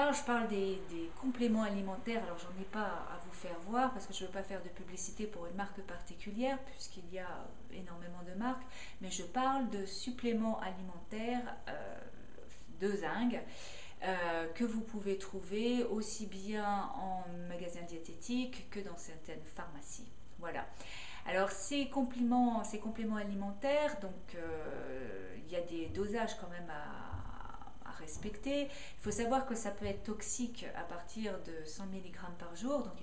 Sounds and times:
Speech: 0.0 - 33.0.

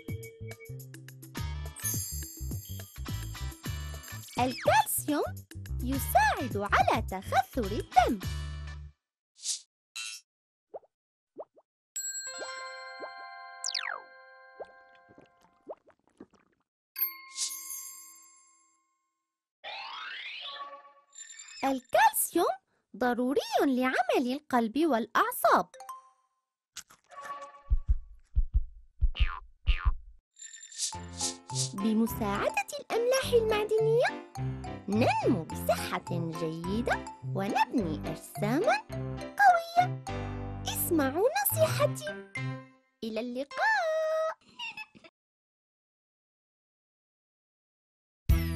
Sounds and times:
Music for children: 0.0 - 8.9, 25.7 - 26.4, 30.9 - 43.6
Child speech, kid speaking: 4.4 - 8.2, 21.6 - 25.7, 31.8 - 34.2, 34.9 - 38.8, 39.4 - 39.9, 40.7 - 42.2, 43.0 - 44.4.

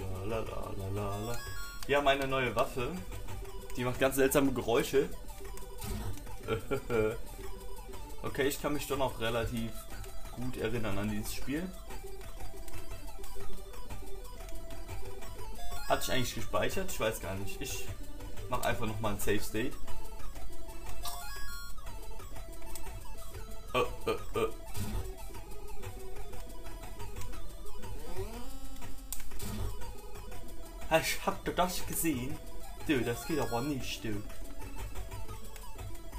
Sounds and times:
Speech: 0.0 - 3.0, 3.8 - 5.1, 8.3 - 9.8, 10.4 - 11.7, 15.9 - 17.9, 18.5 - 19.8, 30.9 - 34.3
Music: 0.0 - 36.1.

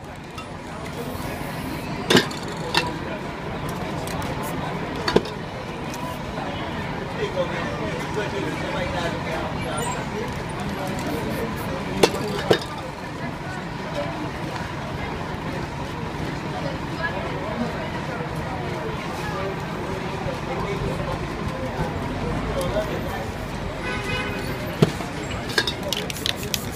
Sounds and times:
Speech: 0.0 - 26.7.

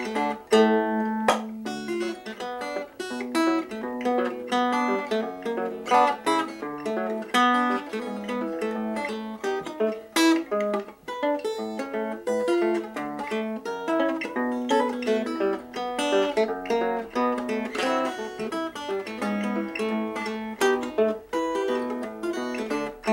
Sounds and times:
Music: 0.0 - 23.1.

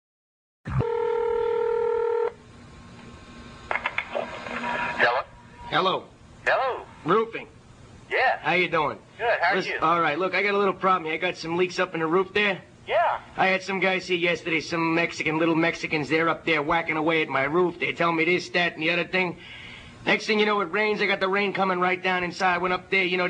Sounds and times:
Speech: 5.0 - 7.5, 8.1 - 19.4, 20.1 - 23.2.

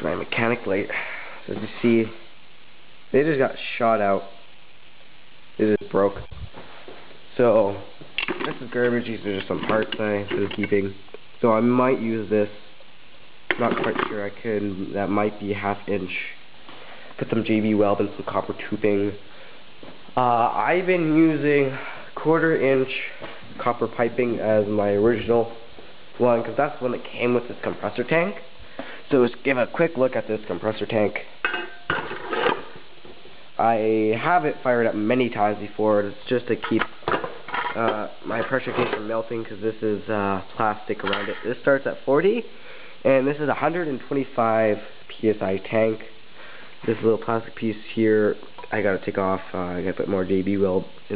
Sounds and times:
Speech: 0.0 - 2.3, 3.1 - 4.4, 5.6 - 6.4, 7.3 - 12.6, 13.5 - 16.4, 17.2 - 19.3, 20.2 - 28.5, 29.1 - 31.4, 33.6 - 37.0, 37.7 - 46.2, 46.8 - 51.1.

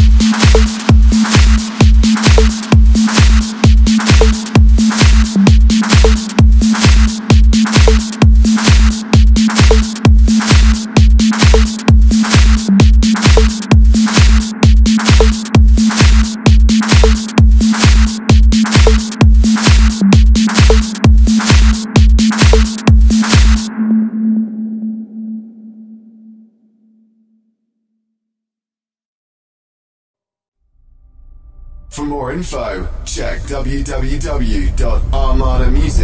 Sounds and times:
Music: 0.0 - 28.4
Speech: 31.9 - 36.0.

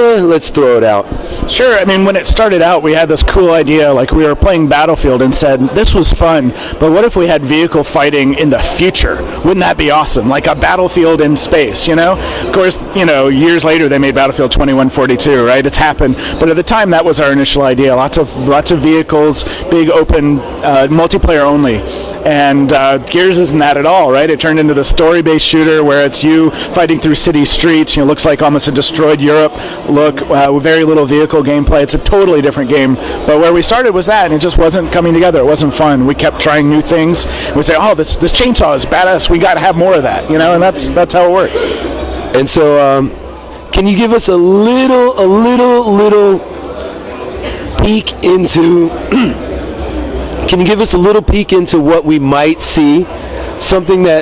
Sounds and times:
Speech: 0.0 - 49.5, 50.3 - 54.2.

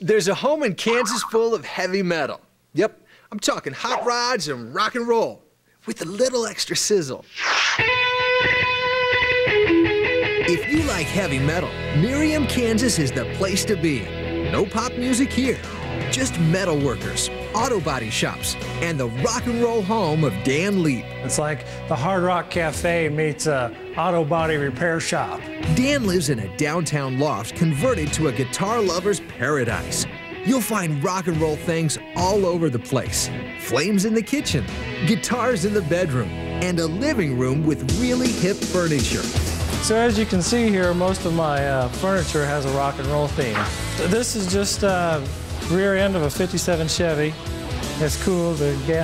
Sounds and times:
Speech: 0.0 - 7.2, 10.5 - 47.4, 48.0 - 49.0.

